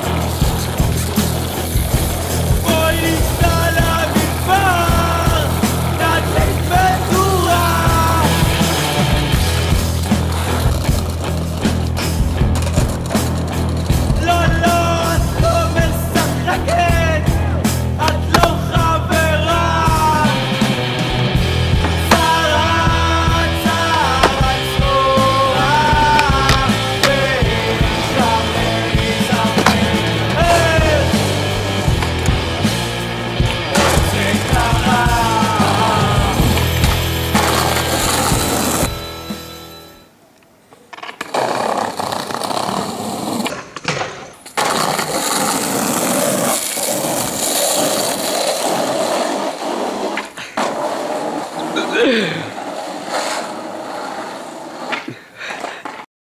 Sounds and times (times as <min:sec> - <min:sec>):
Skateboard: 0:00.0 - 0:39.1, 0:40.7 - 0:56.1
Outside, urban or manmade: 0:00.0 - 0:56.1.